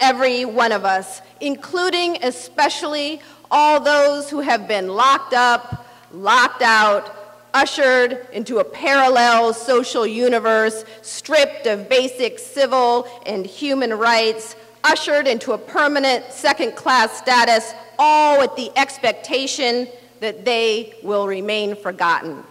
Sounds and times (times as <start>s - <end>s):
Speech: 0.0s - 22.5s.